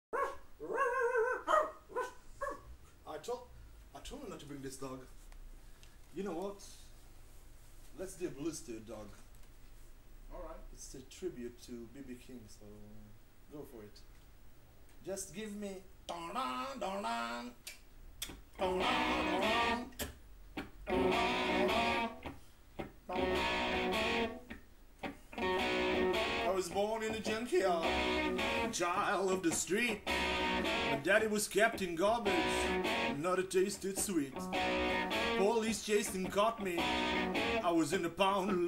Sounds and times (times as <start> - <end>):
Bark: 0.1 - 2.7
Bow-wow: 0.1 - 2.7
Inside, small room: 0.1 - 38.6
Speech: 3.0 - 5.1, 6.1 - 6.9, 7.9 - 9.2, 10.3 - 14.1, 15.0 - 16.3, 26.5 - 27.9, 28.7 - 30.0, 31.0 - 34.4, 35.4 - 36.9, 37.6 - 38.6.